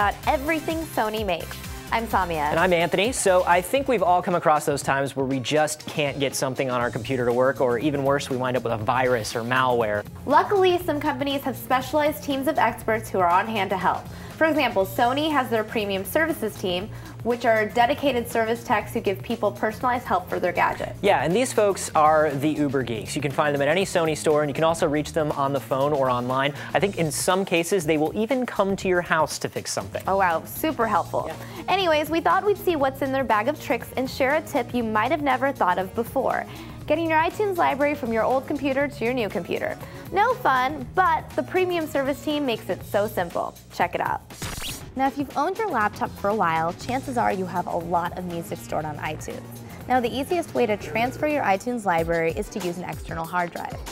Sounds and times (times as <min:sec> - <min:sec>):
Background music: 0:00.0 - 0:53.9.